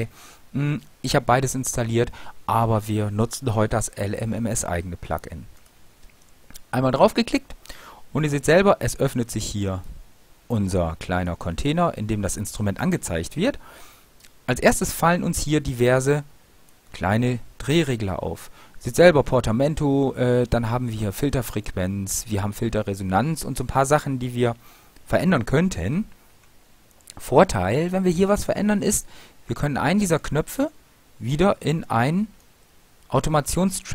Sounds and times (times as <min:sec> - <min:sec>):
Speech: 0:00.0 - 0:05.5, 0:06.6 - 0:13.6, 0:14.5 - 0:16.3, 0:16.9 - 0:26.1, 0:27.1 - 0:32.4, 0:33.1 - 0:33.9.